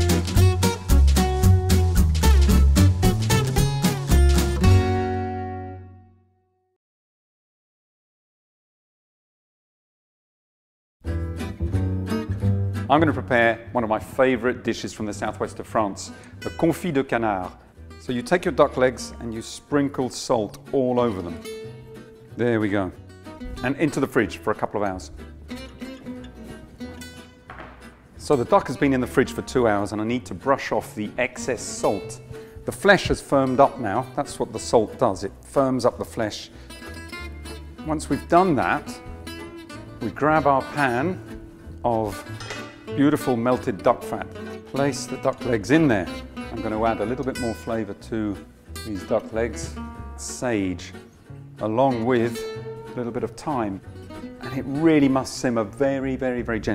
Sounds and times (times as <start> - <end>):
Music: 0.0 - 6.8, 11.0 - 56.7
Speech: 12.9 - 21.4, 22.4 - 23.0, 23.6 - 25.2, 28.2 - 36.5, 37.8 - 39.0, 40.0 - 41.2, 41.8 - 42.3, 43.0 - 51.0, 51.6 - 52.4, 53.0 - 53.8, 54.4 - 56.7.